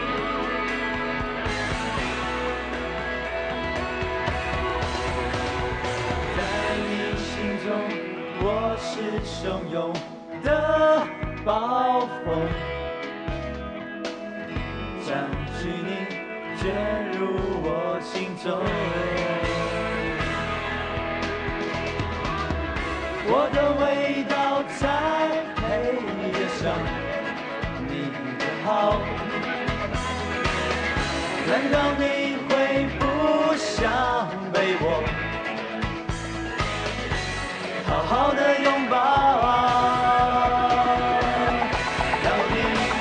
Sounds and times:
Music: 0.0s - 43.0s
Singing: 5.8s - 12.6s, 15.0s - 20.5s, 23.2s - 29.6s, 31.3s - 35.2s, 37.8s - 43.0s.

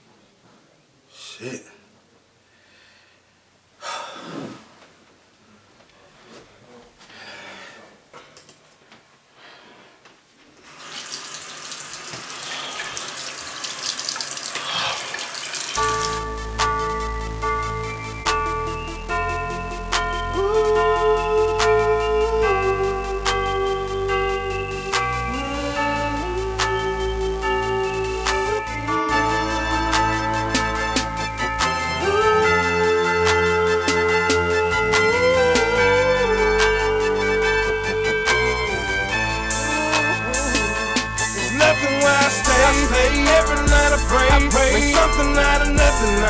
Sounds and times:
Blues: 15.8s - 46.2s.

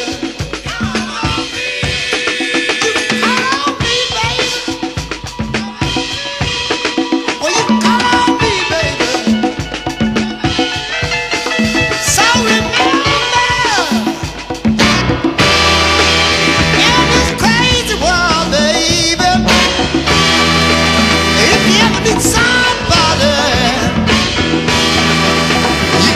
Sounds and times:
Psychedelic rock: 0.0s - 26.1s.

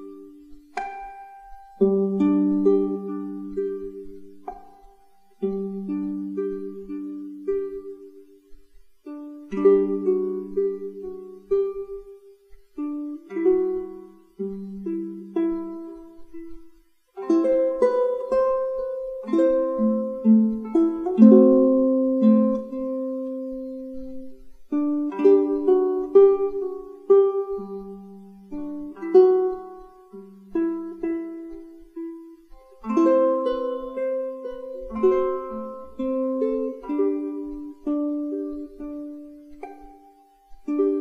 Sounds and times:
Ukulele: 0.0s - 41.0s.

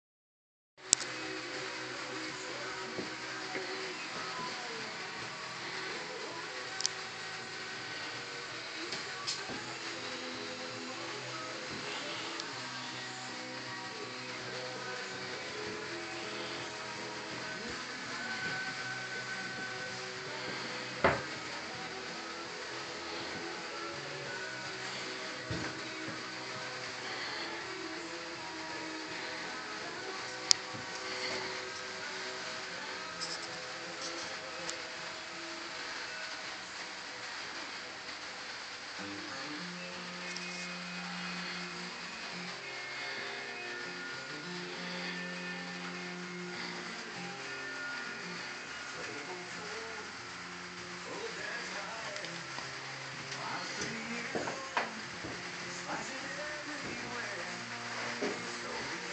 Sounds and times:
Music: 0.8s - 59.1s.

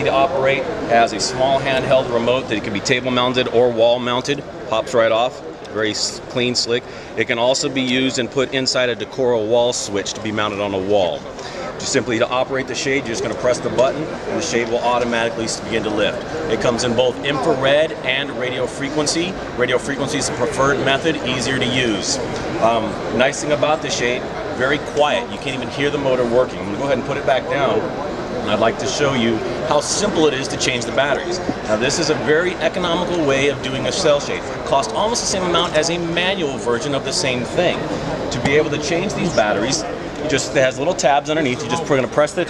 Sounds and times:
Speech: 0.0s - 42.4s.

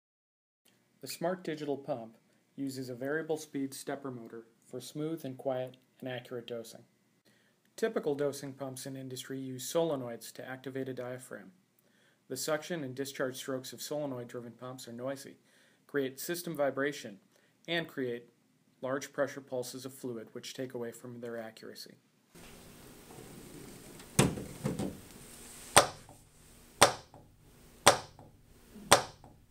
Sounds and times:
Speech: 1.0s - 6.9s, 7.8s - 11.6s, 12.3s - 22.0s.

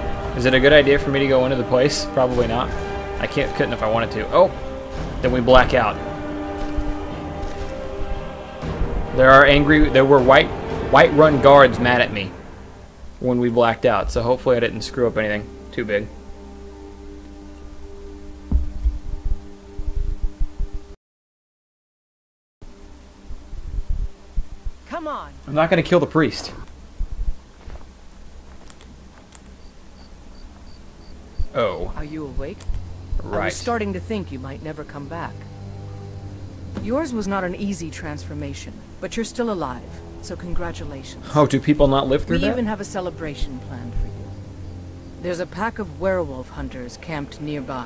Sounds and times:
Speech: 0.4s - 4.5s, 5.2s - 6.0s, 13.2s - 16.1s, 24.9s - 26.7s, 31.6s - 32.6s, 33.2s - 35.4s, 36.8s - 44.1s, 45.3s - 47.8s.

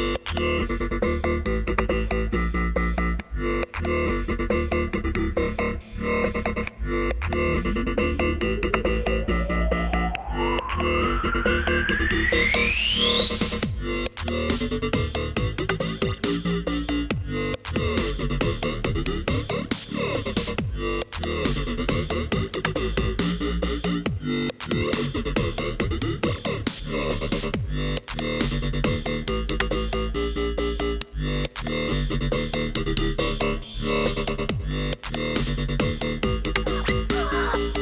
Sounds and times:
Synthesizer: 0.0s - 37.8s
Dubstep: 5.9s - 14.8s, 36.4s - 37.8s
House music: 6.0s - 13.6s, 36.6s - 37.8s.

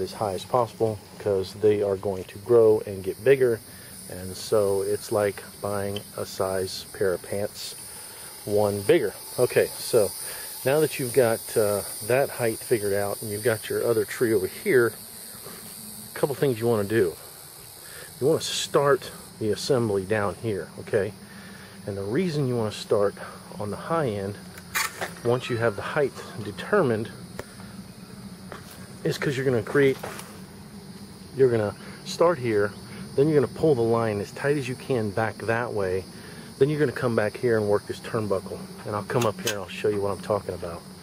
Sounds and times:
Cricket: 0.0s - 41.0s.

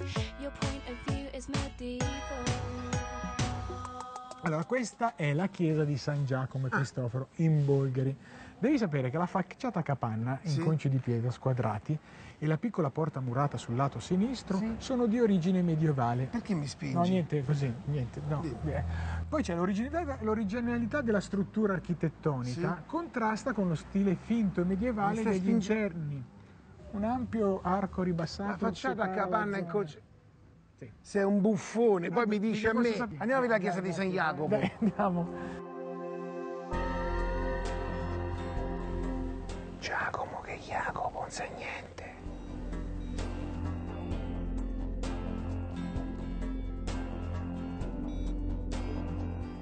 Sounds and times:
Music: 0.0s - 6.2s, 33.8s - 49.6s
Speech: 19.4s - 26.2s.

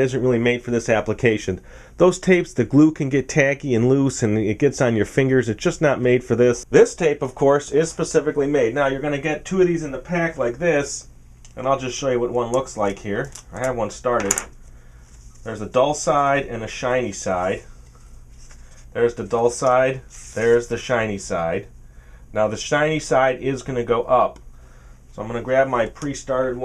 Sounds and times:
Speech: 0.0s - 14.5s, 15.4s - 17.7s, 18.9s - 21.7s, 22.3s - 24.4s, 25.1s - 26.6s.

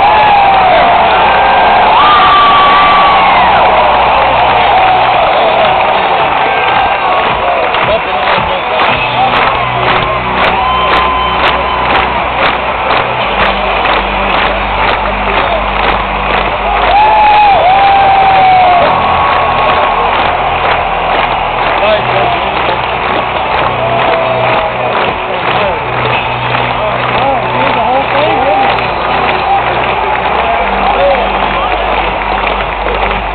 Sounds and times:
Speech: 26.8s - 32.1s.

